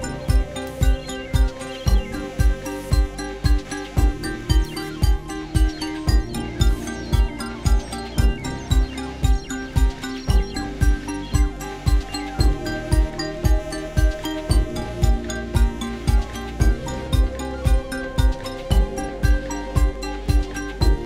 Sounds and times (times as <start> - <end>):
Music: 0.0 - 21.0.